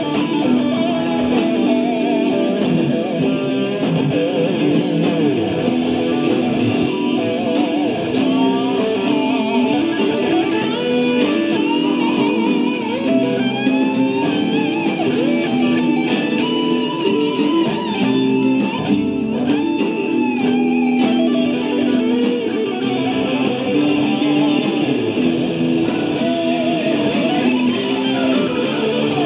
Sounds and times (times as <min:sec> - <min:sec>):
Electric guitar: 0:00.0 - 0:29.2.